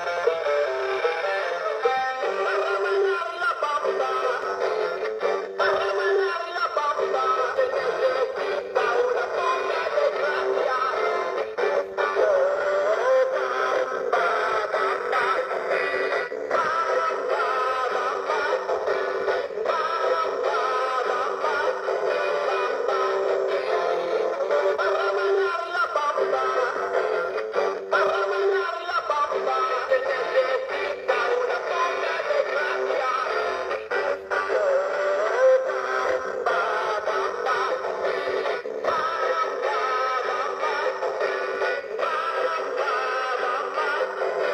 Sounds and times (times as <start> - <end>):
Music: 0.0 - 44.5
Singing: 24.6 - 44.5.